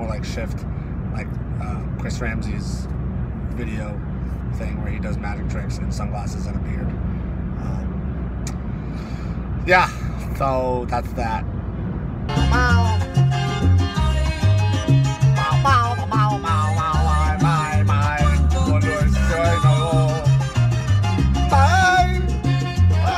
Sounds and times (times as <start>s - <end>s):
Salsa music: 12.3s - 23.1s.